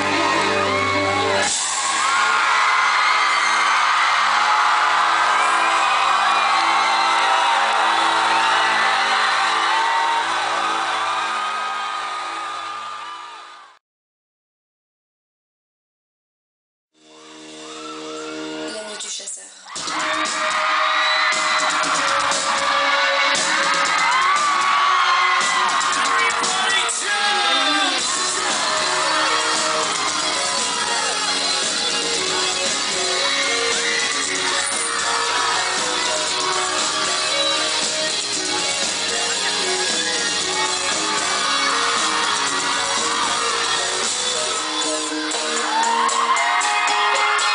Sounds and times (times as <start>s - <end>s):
Music: 0.0s - 13.4s, 17.0s - 47.5s
Speech: 18.7s - 19.6s, 26.1s - 28.0s.